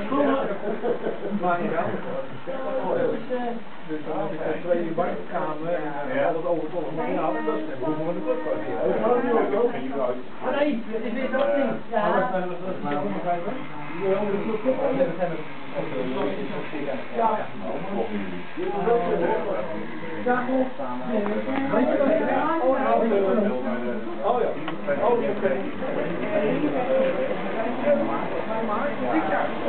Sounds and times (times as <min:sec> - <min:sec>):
Speech: 0:00.0 - 0:29.6.